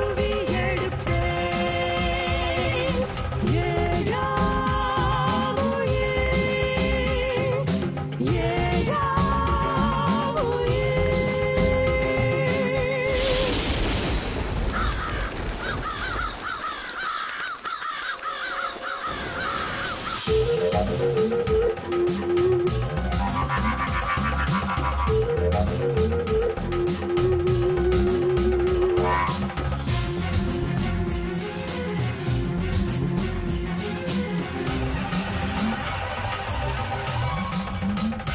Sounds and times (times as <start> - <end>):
Music: 0.0 - 13.7, 18.0 - 38.3.